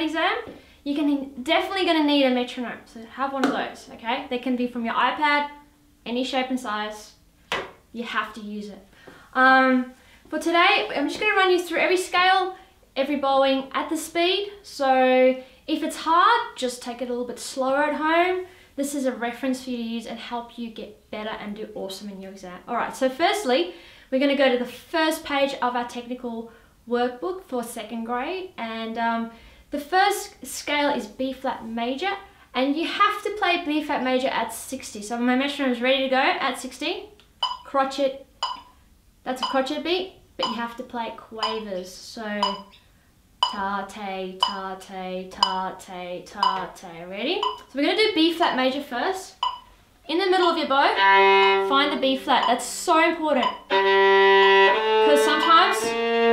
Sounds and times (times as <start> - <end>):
Speech: 0.0 - 7.2, 7.9 - 38.3, 39.2 - 42.7, 43.5 - 49.4, 50.0 - 51.0, 51.7 - 53.7, 55.0 - 56.0.